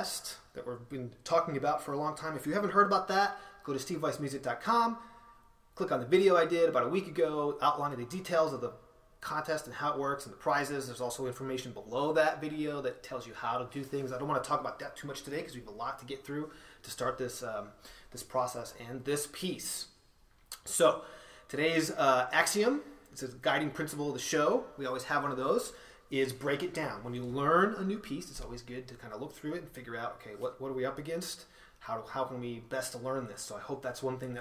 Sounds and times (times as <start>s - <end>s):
Speech: 0.0s - 5.0s, 5.8s - 19.9s, 20.6s - 34.4s.